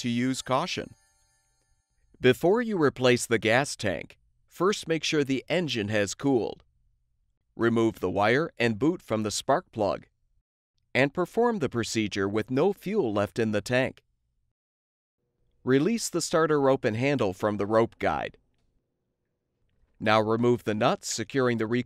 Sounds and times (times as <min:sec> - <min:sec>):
Speech: 0:00.0 - 0:01.0, 0:02.2 - 0:06.6, 0:07.6 - 0:10.1, 0:11.0 - 0:14.0, 0:15.7 - 0:18.4, 0:20.0 - 0:21.8.